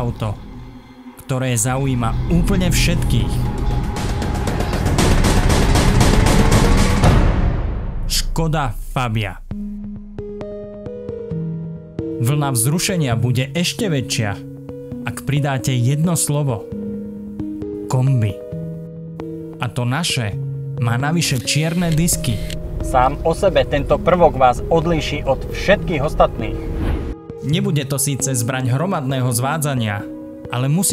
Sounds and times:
Speech: 0.0 - 0.4, 1.2 - 3.4, 8.1 - 9.5, 12.2 - 14.4, 15.1 - 16.6, 17.9 - 18.4, 19.6 - 26.6, 27.4 - 30.9
Music: 0.0 - 30.9.

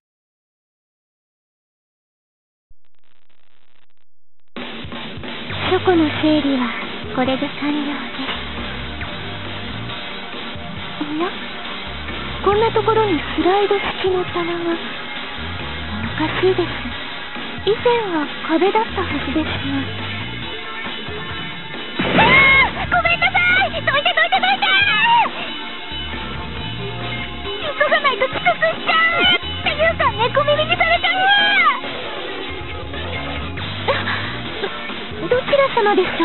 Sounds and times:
Music: 4.6 - 36.2
Speech: 5.7 - 8.3, 12.4 - 14.9, 16.2 - 16.9, 17.6 - 19.9, 22.8 - 25.3, 27.6 - 31.8, 35.2 - 36.2.

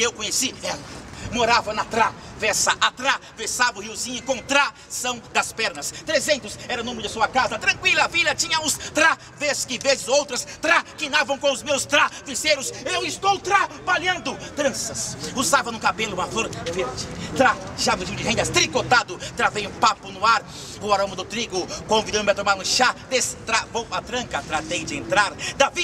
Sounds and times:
Speech: 0.0 - 25.8.

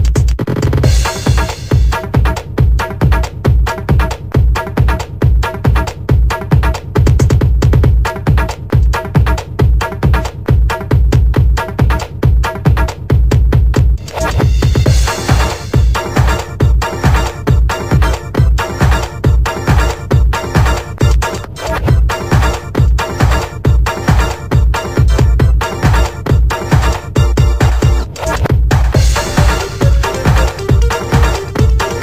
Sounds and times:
Exciting music: 0.9 - 2.5, 14.0 - 32.0.

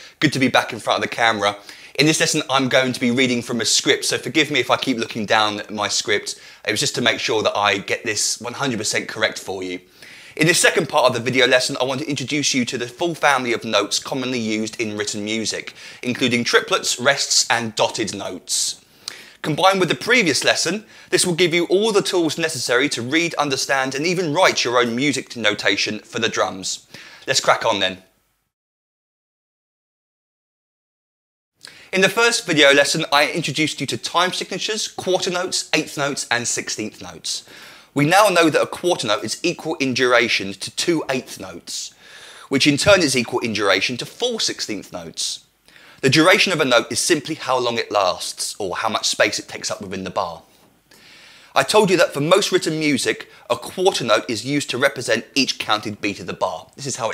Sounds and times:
Speech: 0.0 - 18.8, 19.4 - 28.1, 31.9 - 50.5, 51.6 - 57.1.

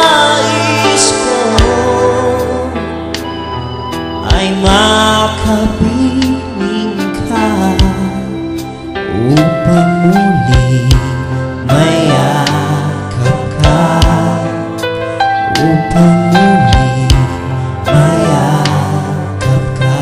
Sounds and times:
Male singing: 0.0 - 2.9, 4.2 - 8.4, 9.1 - 14.7, 15.5 - 20.0
Gospel music: 0.0 - 20.0.

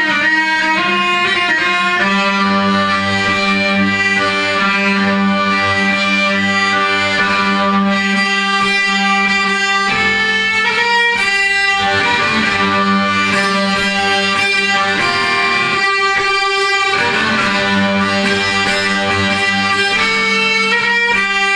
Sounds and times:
Violin, fiddle: 0.0 - 21.5.

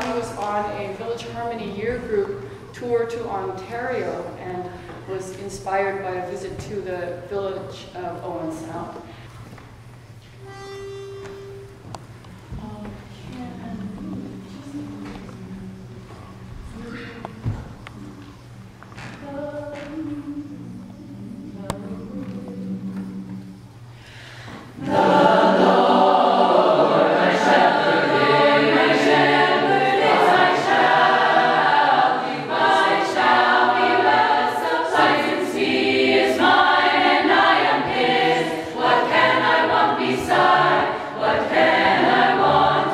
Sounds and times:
Speech: 0.0 - 9.0
Music: 9.8 - 42.9.

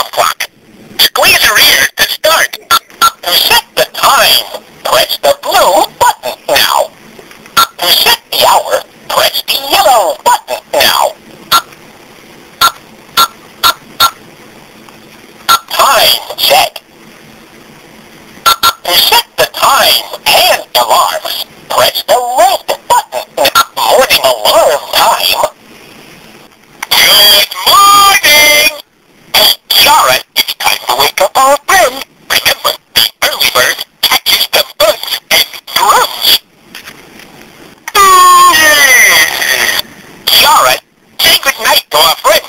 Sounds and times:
Speech: 0.0 - 6.9, 7.7 - 11.2, 15.5 - 16.8, 18.8 - 25.6, 29.4 - 36.4, 38.0 - 42.4.

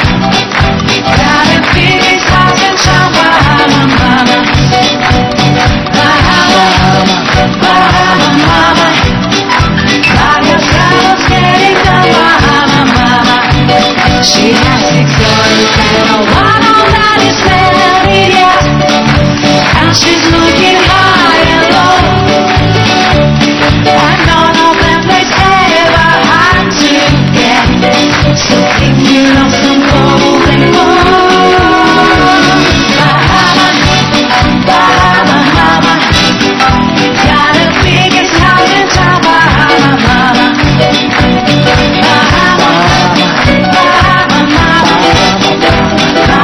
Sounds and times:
Music of Asia: 0.0 - 46.4.

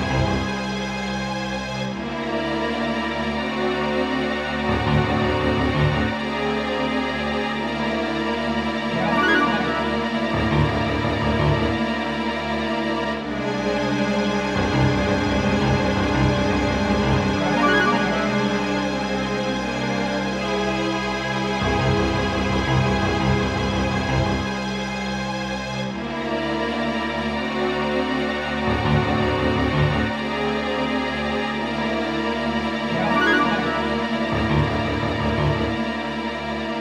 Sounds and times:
Theme music: 8.8 - 11.2, 17.2 - 19.8, 32.8 - 35.6
Soundtrack music: 8.8 - 11.5, 17.1 - 19.8, 32.9 - 35.7.

